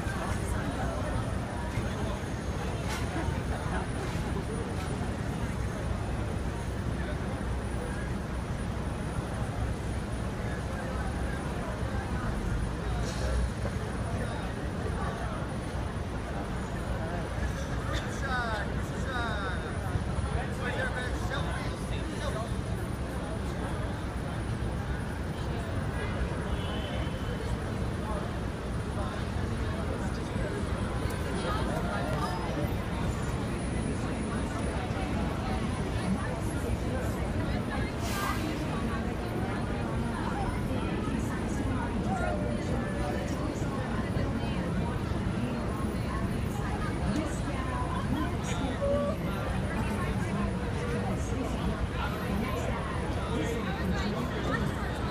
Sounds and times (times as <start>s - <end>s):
Speech: 0.0s - 55.1s.